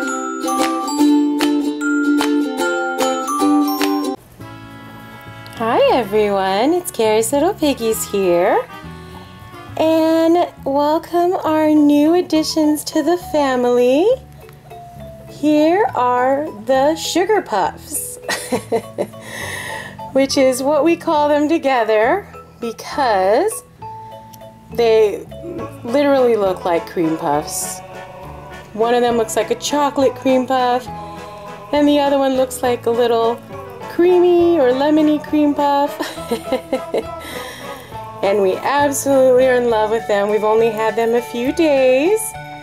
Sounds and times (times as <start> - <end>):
Music: 0.0 - 42.6
Speech: 5.6 - 8.7, 9.8 - 14.2, 15.4 - 18.2, 20.2 - 23.6, 24.8 - 27.8, 38.2 - 42.3.